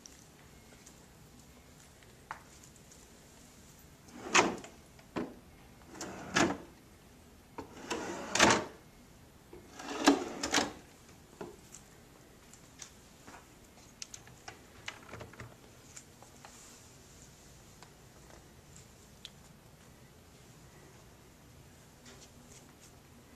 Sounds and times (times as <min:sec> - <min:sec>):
Drawer open or close: 0:04.1 - 0:06.7, 0:07.6 - 0:08.8, 0:09.6 - 0:10.8.